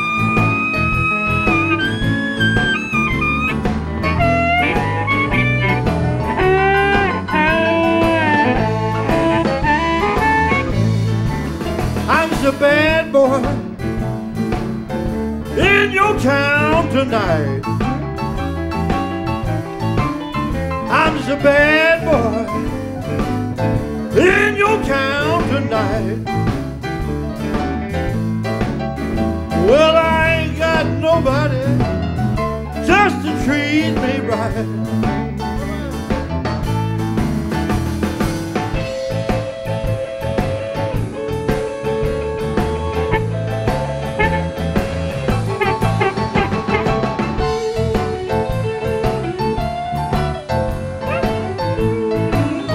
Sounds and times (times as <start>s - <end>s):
Harmonica: 0.0s - 11.2s, 38.8s - 52.7s.